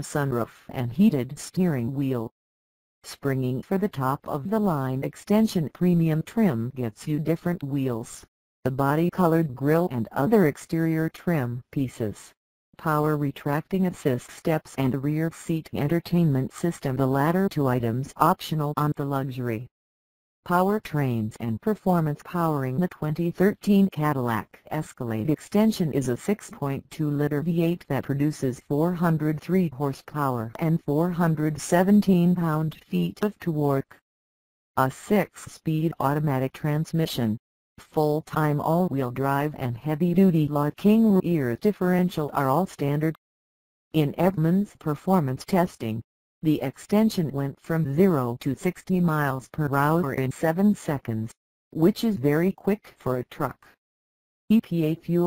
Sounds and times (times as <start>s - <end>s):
Speech: 0.0s - 2.4s, 3.1s - 19.7s, 20.5s - 34.0s, 34.8s - 43.2s, 44.0s - 53.8s, 54.5s - 55.2s.